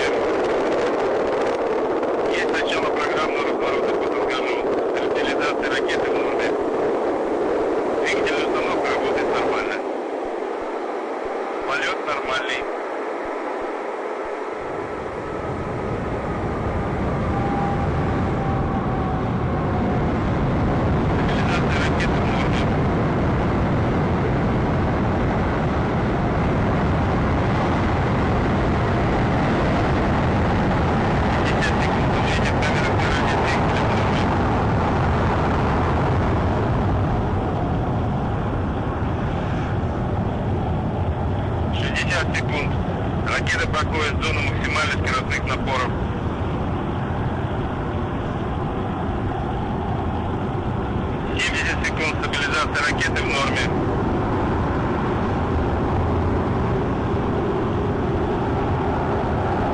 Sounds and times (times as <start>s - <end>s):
Speech: 2.3s - 6.6s, 8.0s - 9.8s, 11.7s - 12.7s, 21.3s - 22.7s, 31.4s - 34.2s, 41.8s - 46.0s, 51.3s - 53.7s.